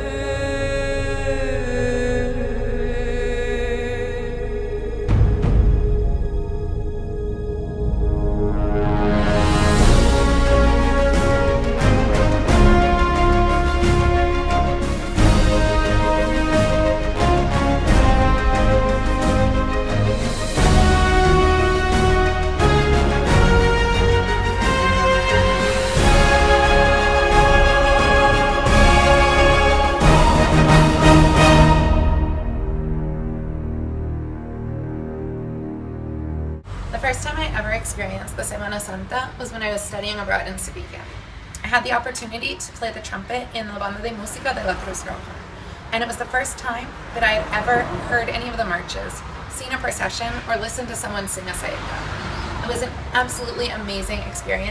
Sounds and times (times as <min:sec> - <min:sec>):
Music: 0:00.0 - 0:36.7.